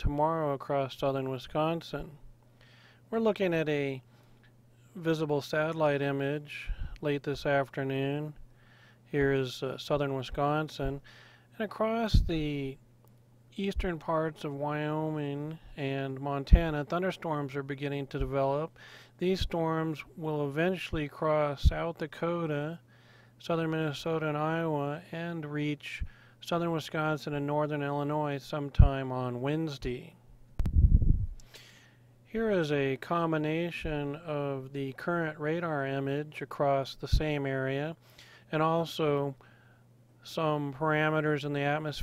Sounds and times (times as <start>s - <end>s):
Speech: 0.0s - 2.2s, 3.1s - 4.1s, 4.9s - 8.4s, 9.1s - 12.8s, 13.6s - 22.8s, 23.4s - 30.2s, 32.3s - 39.4s, 40.2s - 42.0s.